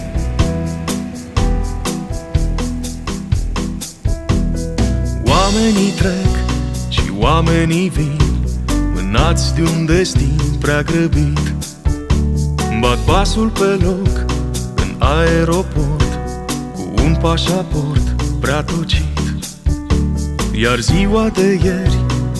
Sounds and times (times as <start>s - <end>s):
Soul music: 0.0s - 22.3s.